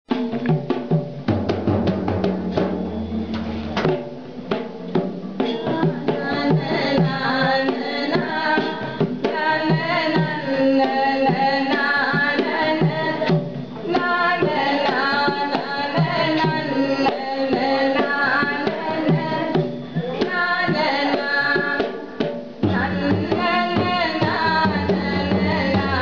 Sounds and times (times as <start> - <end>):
Drum roll: 0.1 - 26.0
Inside, large room or hall: 0.1 - 26.0.